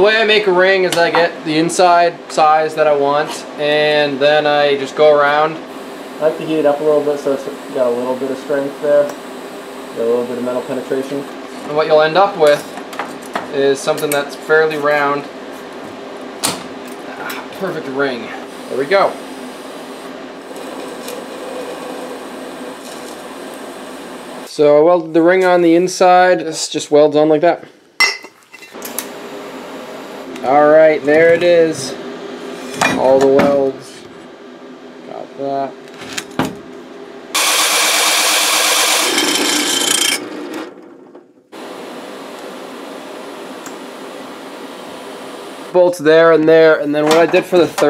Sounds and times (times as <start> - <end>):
Speech: 0.0 - 5.6, 6.2 - 9.2, 10.0 - 12.7, 13.5 - 15.3, 17.1 - 19.2, 24.5 - 27.7, 30.4 - 32.0, 32.9 - 34.1, 35.1 - 35.8, 45.7 - 47.8.